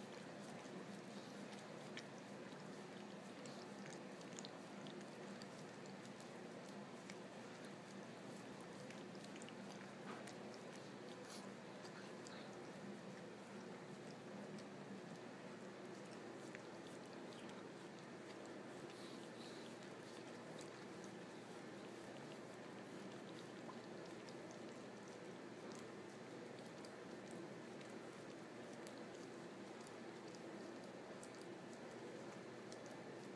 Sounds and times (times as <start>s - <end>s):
Domestic animals, pets: 0.0s - 33.3s.